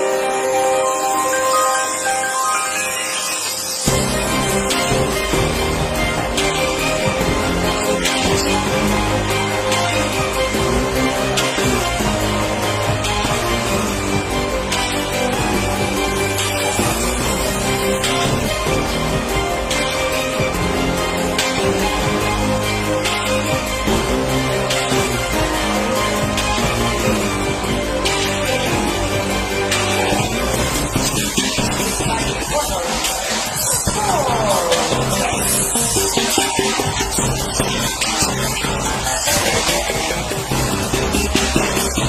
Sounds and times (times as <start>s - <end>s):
Music: 0.0s - 42.0s
Speech: 32.0s - 35.8s.